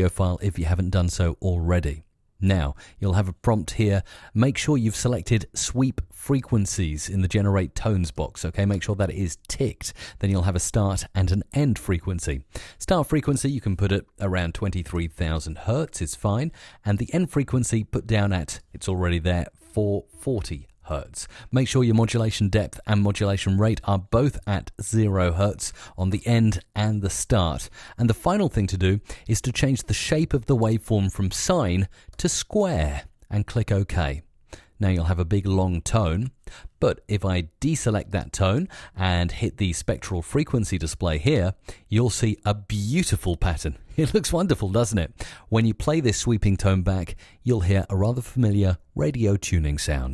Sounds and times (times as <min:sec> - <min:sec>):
Speech: 0:00.0 - 0:50.1.